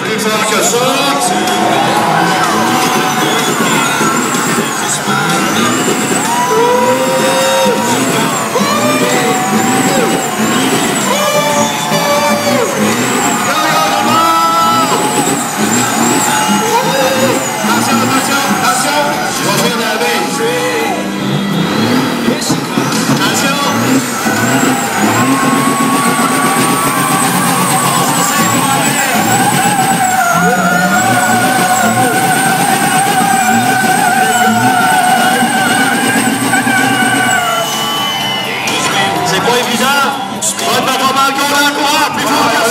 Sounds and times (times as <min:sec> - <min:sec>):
Speech: 0:00.0 - 0:03.7, 0:06.5 - 0:15.2, 0:16.5 - 0:21.0, 0:22.2 - 0:24.0, 0:27.9 - 0:29.5, 0:38.6 - 0:42.7.